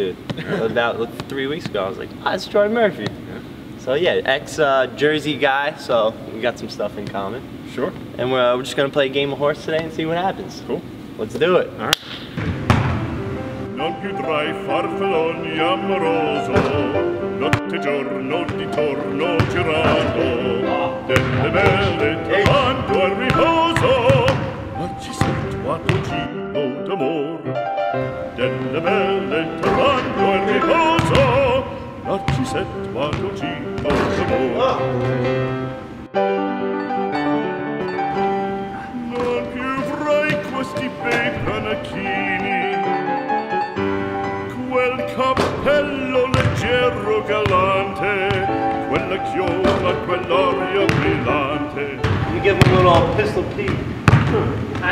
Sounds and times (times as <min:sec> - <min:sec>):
Speech: 0:03.8 - 0:12.0, 0:52.4 - 0:53.8.